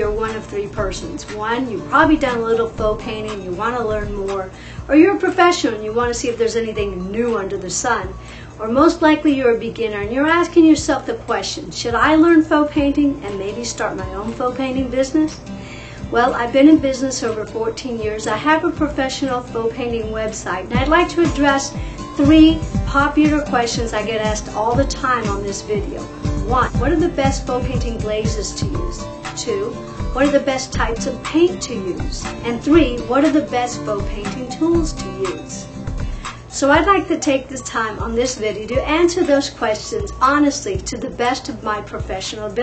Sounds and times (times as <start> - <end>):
Speech: 0.0 - 15.4, 16.1 - 35.6, 36.6 - 42.6
Music: 0.0 - 42.6.